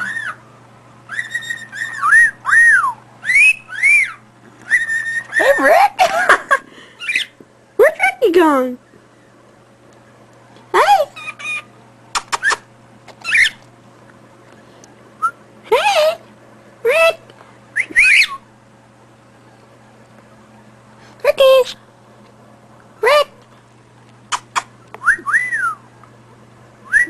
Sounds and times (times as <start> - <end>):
Whistling: 1.1 - 5.4, 15.2 - 15.4, 17.8 - 18.5, 25.0 - 25.9, 26.8 - 27.1
Speech: 5.4 - 6.0, 7.8 - 8.8, 10.7 - 11.2, 15.7 - 17.3, 21.2 - 21.8, 23.0 - 23.4.